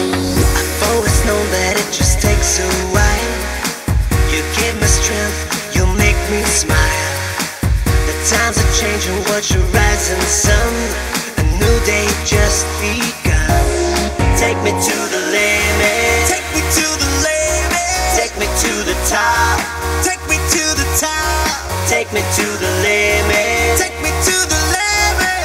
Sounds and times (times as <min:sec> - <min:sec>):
Music: 0:00.0 - 0:25.4.